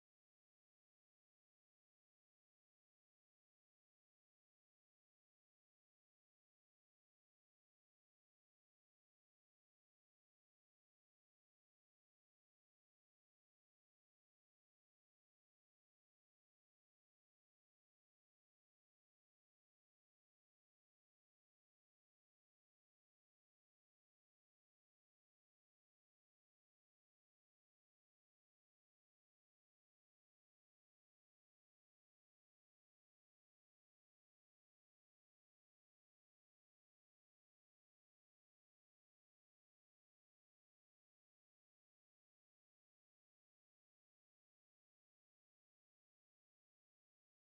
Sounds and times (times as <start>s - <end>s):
Silence: 0.0s - 47.5s.